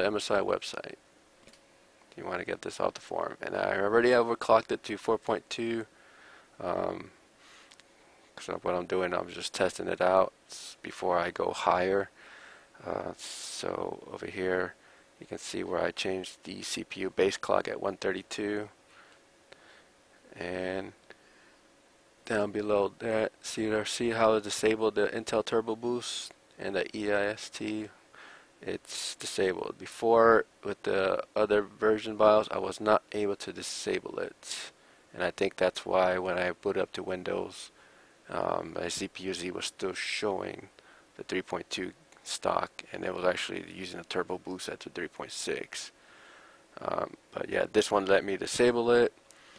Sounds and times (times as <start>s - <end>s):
Speech: 0.0s - 1.0s, 2.2s - 5.9s, 6.6s - 7.2s, 8.4s - 12.1s, 12.8s - 18.8s, 20.3s - 21.0s, 22.2s - 28.0s, 28.6s - 37.7s, 38.3s - 46.0s, 46.8s - 49.2s.